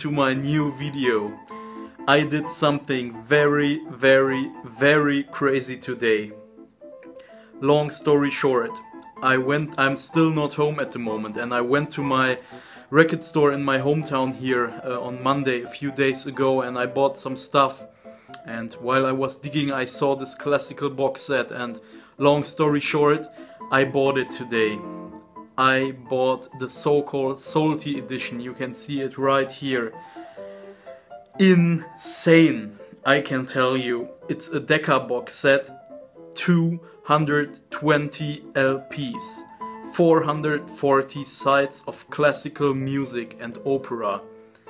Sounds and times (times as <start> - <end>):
Speech: 0.0 - 1.4, 2.1 - 6.4, 7.6 - 17.8, 18.4 - 24.9, 25.6 - 30.0, 31.4 - 35.7, 36.4 - 44.2
Music: 0.0 - 44.6.